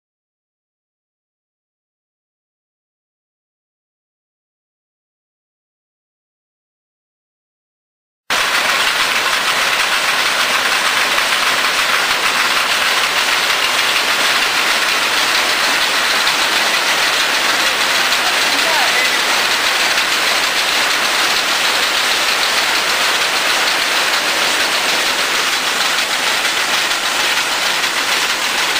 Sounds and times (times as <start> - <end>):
Speech: 17.3 - 19.6.